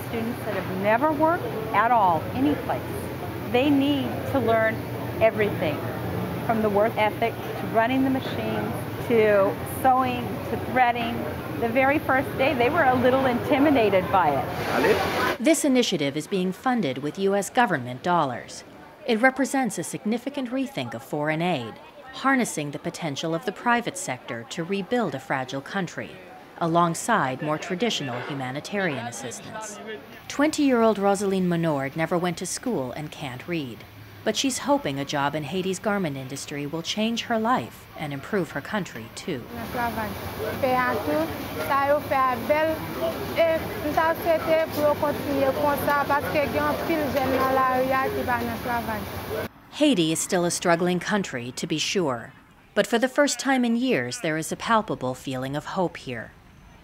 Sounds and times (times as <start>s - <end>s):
Speech: 0.0s - 2.9s, 6.5s - 49.1s, 49.8s - 56.3s.